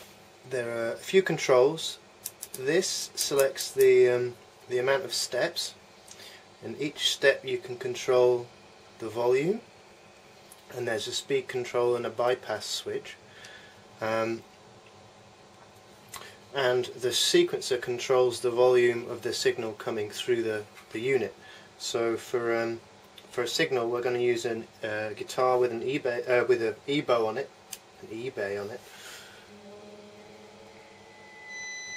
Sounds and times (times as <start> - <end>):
Speech: 0.5 - 2.0, 2.6 - 5.8, 6.6 - 9.7, 10.7 - 13.2, 14.0 - 14.5, 16.5 - 28.9.